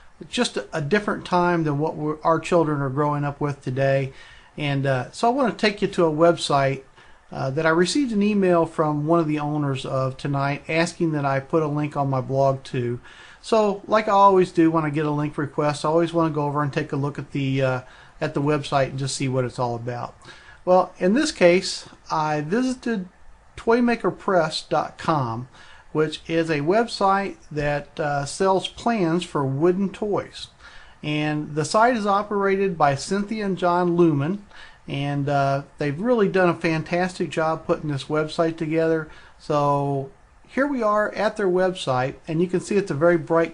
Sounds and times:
Speech: 0:00.2 - 0:43.5.

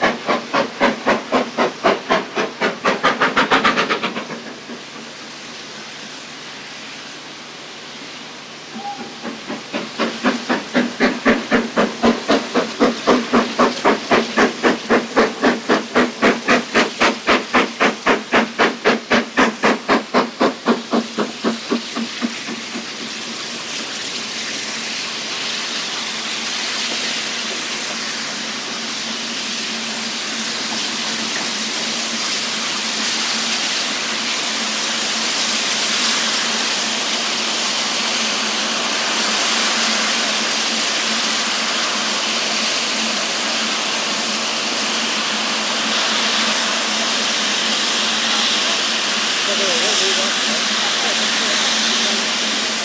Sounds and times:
Hiss: 0:00.0 - 0:52.8.

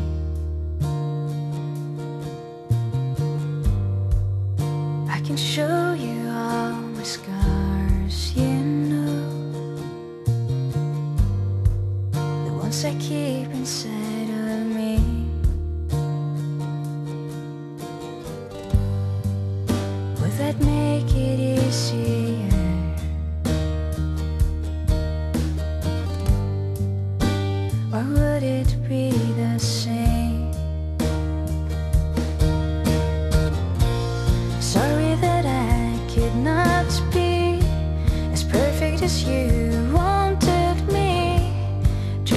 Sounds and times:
Music: 0:00.0 - 0:42.3.

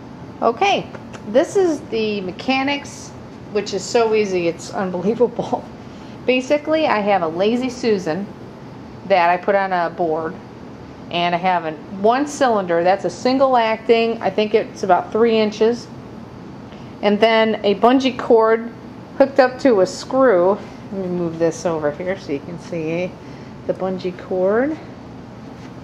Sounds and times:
Speech: 0:00.4 - 0:05.7, 0:06.3 - 0:08.4, 0:09.1 - 0:10.4, 0:11.1 - 0:15.9, 0:17.0 - 0:24.9.

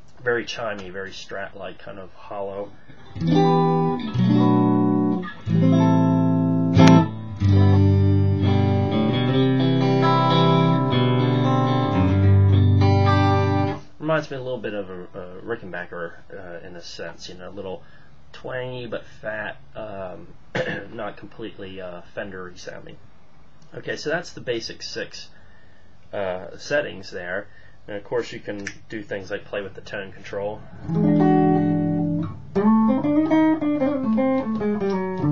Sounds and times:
Inside, small room: 0:00.0 - 0:35.3
Speech: 0:00.2 - 0:02.8, 0:14.0 - 0:23.0, 0:23.7 - 0:25.4, 0:26.1 - 0:30.7
Guitar: 0:02.8 - 0:13.9, 0:30.2 - 0:35.3.

